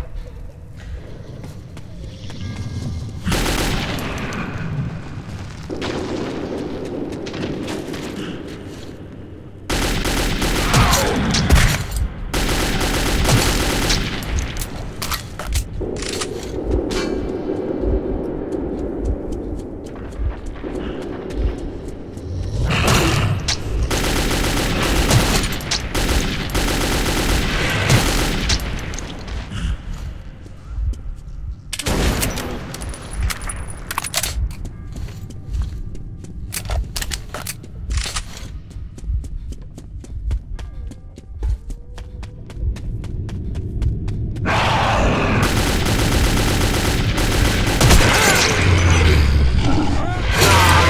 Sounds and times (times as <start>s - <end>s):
Fusillade: 3.3s - 4.2s, 9.7s - 14.9s, 23.8s - 29.0s, 45.4s - 49.0s.